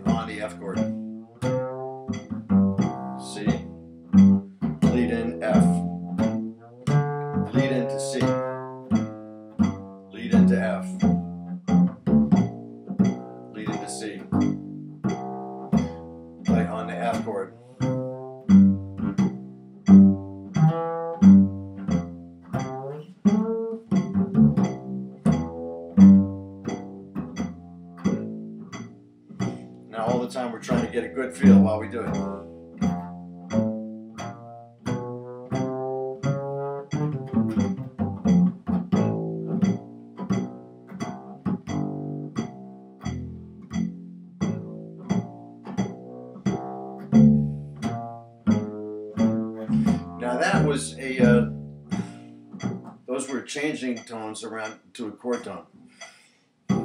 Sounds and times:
Pizzicato: 0.0 - 55.6
Cello: 0.0 - 56.1
Double bass: 0.0 - 56.8.

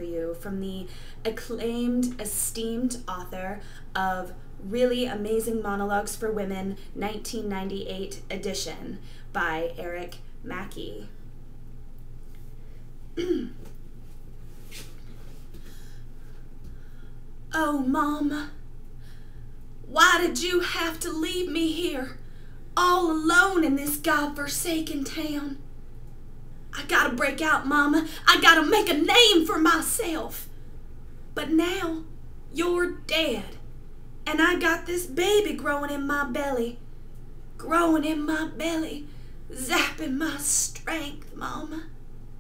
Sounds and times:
Narration, monologue: 0.0 - 42.4.

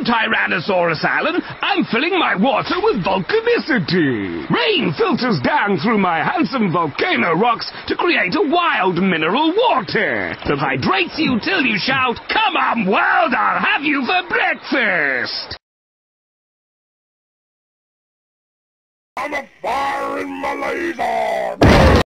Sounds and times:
Speech: 0.0 - 15.6, 19.2 - 21.7.

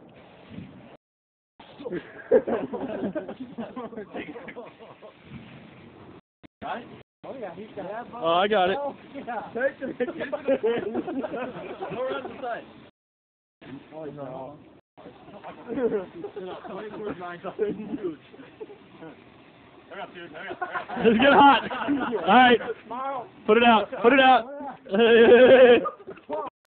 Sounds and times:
Speech: 6.6 - 10.4, 11.7 - 12.7, 15.6 - 18.2, 19.9 - 25.0.

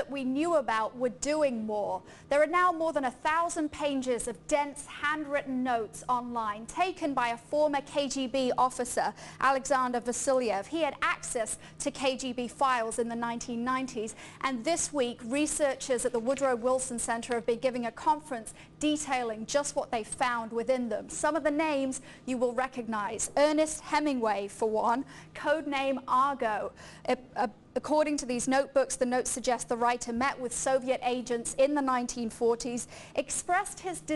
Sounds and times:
Speech: 0.0 - 34.1.

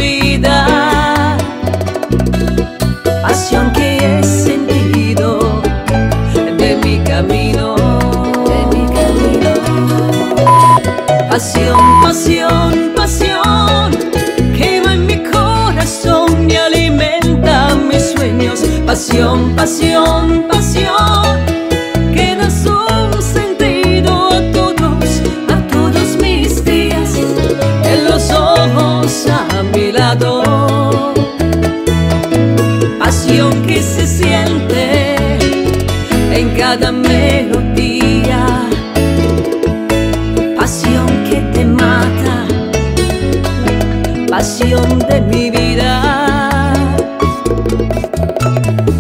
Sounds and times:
Salsa music: 0.0 - 49.0.

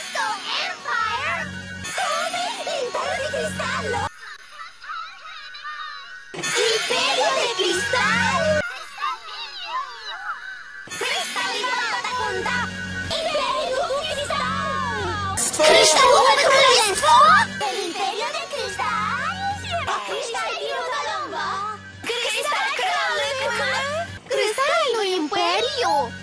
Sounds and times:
Music: 0.0 - 26.2
Speech: 11.0 - 26.1.

